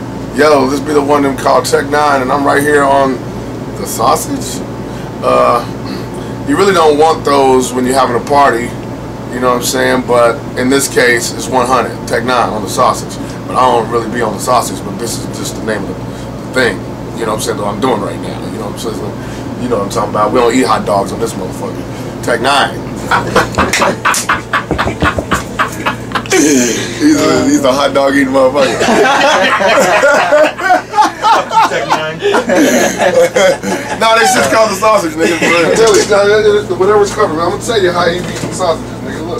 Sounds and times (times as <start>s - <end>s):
Speech: 0.3s - 3.2s, 3.8s - 5.7s, 6.5s - 22.8s, 26.5s - 28.8s, 34.0s - 39.3s.